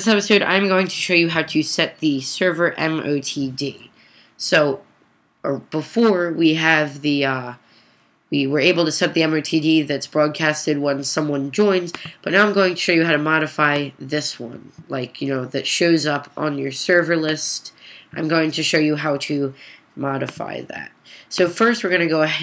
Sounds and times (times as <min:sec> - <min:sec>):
Speech: 0:00.0 - 0:04.8, 0:05.5 - 0:07.6, 0:08.3 - 0:22.4.